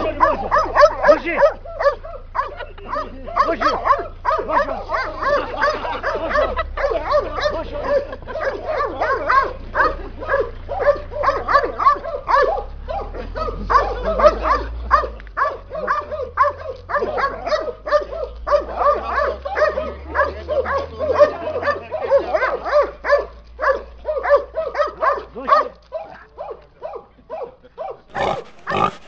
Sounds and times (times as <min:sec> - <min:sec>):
Speech: 0:00.0 - 0:01.6, 0:02.5 - 0:10.5, 0:17.0 - 0:28.9
Dog: 0:00.0 - 0:29.0.